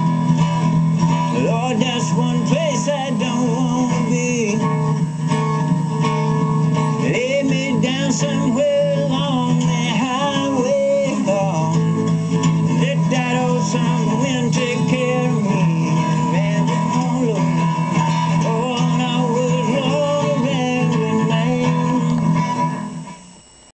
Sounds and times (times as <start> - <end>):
Music: 0.0 - 23.6
Male singing: 1.4 - 4.8, 7.0 - 22.4.